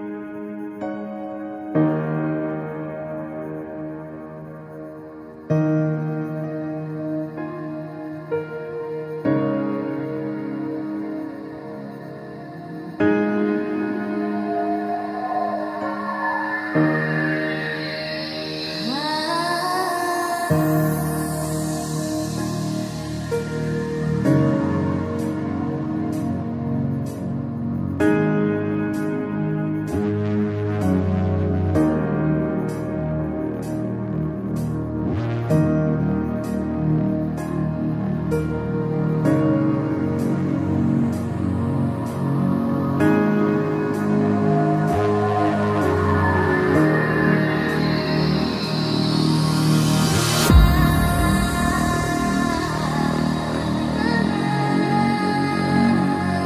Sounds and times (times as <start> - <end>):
New-age music: 0.0 - 56.4.